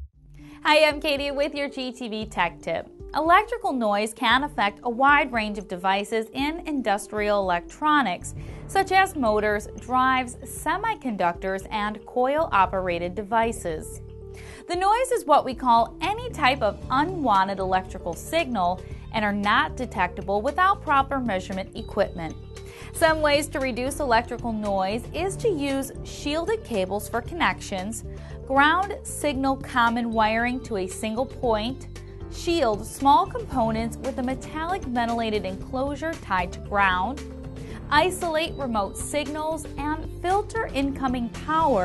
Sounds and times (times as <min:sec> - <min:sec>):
Music: 0:00.0 - 0:41.8
Speech: 0:00.6 - 0:14.0, 0:14.7 - 0:37.2, 0:37.9 - 0:41.8.